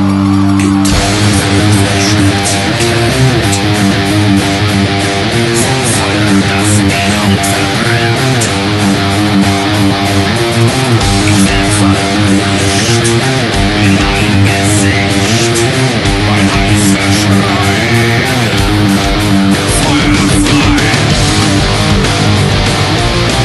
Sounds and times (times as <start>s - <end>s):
Electric guitar: 0.0s - 23.4s.